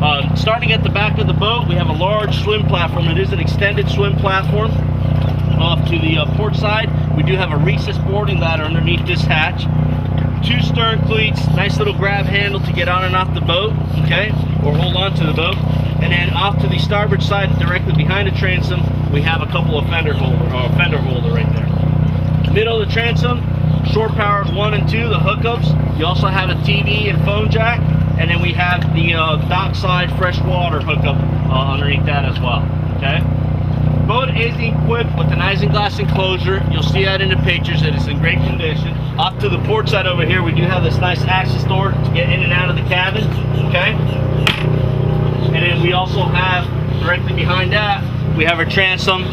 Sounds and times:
Speech: 0:00.0 - 0:04.8, 0:05.6 - 0:09.7, 0:10.4 - 0:21.8, 0:22.4 - 0:33.3, 0:34.1 - 0:44.0, 0:45.5 - 0:49.3.

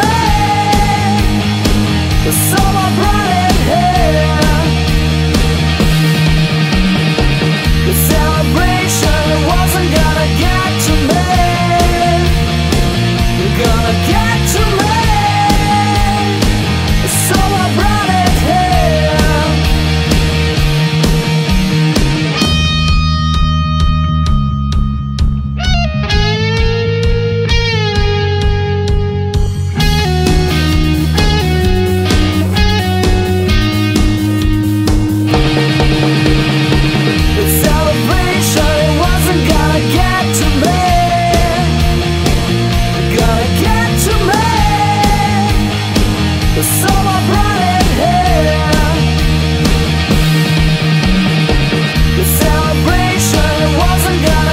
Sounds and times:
Progressive rock: 0:00.0 - 0:54.5.

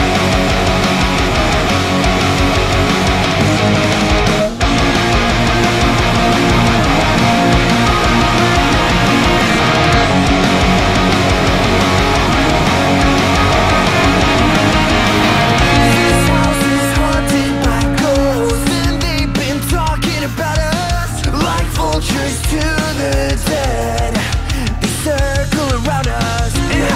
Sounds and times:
Strum: 0:00.0 - 0:22.7
Electric guitar: 0:00.0 - 0:26.9.

